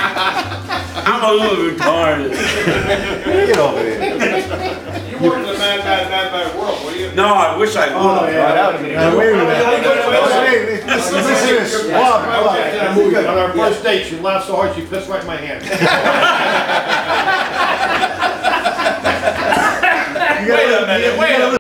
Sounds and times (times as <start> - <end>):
Speech: 1.0 - 4.2, 5.0 - 15.7, 20.2 - 21.6.